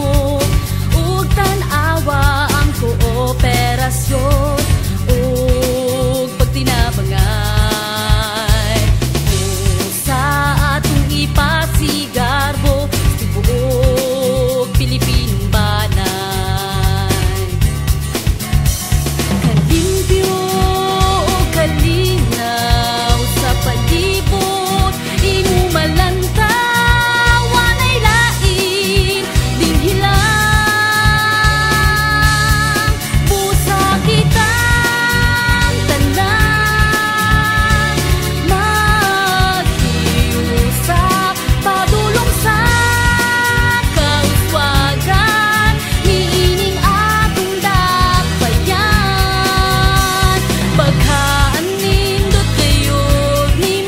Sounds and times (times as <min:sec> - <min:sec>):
Jingle (music): 0:00.0 - 0:53.8.